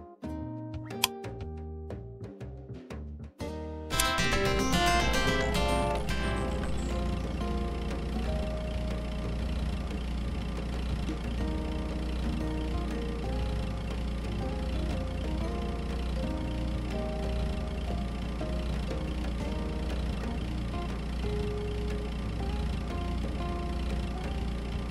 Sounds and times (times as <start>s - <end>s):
Music: 0.0s - 24.9s
Car: 4.0s - 24.9s.